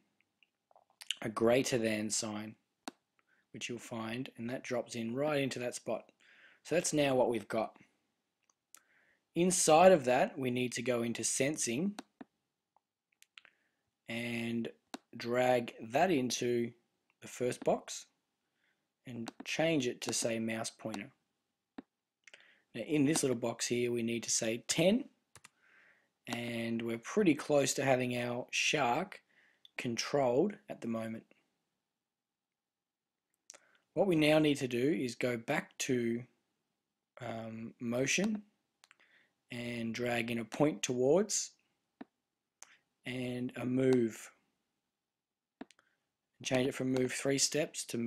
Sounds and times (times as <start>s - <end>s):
Speech: 1.0s - 2.6s, 3.6s - 6.1s, 6.7s - 7.8s, 9.4s - 12.0s, 14.1s - 18.1s, 19.1s - 21.2s, 22.8s - 25.1s, 26.3s - 29.2s, 29.8s - 31.3s, 34.0s - 36.3s, 37.2s - 38.5s, 39.5s - 41.6s, 43.1s - 44.4s, 46.4s - 48.0s.